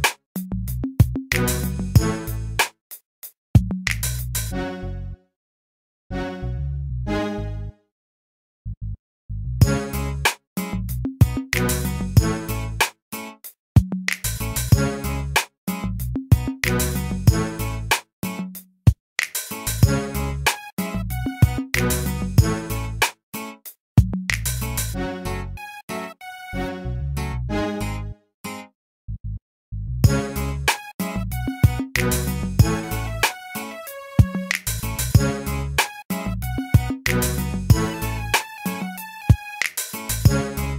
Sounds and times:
Music: 0.0s - 5.4s, 6.1s - 7.9s, 9.6s - 28.8s, 30.0s - 40.7s.

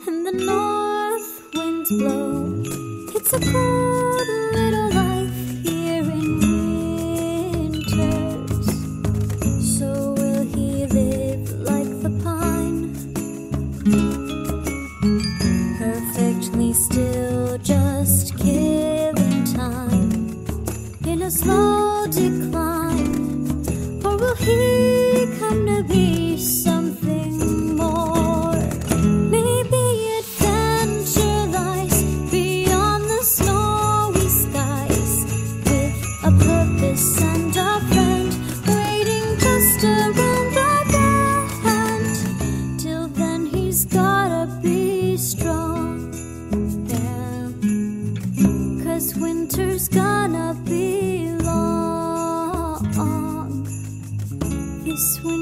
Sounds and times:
Jingle, tinkle: 0.0s - 55.4s.

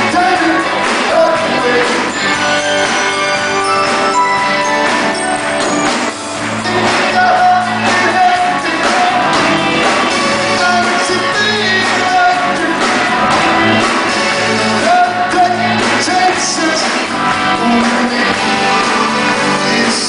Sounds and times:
Music: 0.0s - 20.0s.

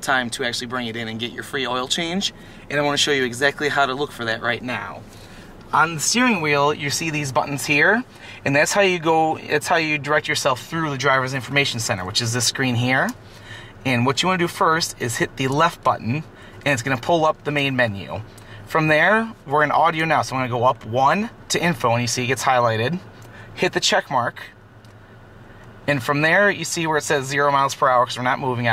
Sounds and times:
Speech: 0.0s - 5.0s, 5.7s - 13.2s, 13.8s - 24.6s, 25.9s - 28.7s.

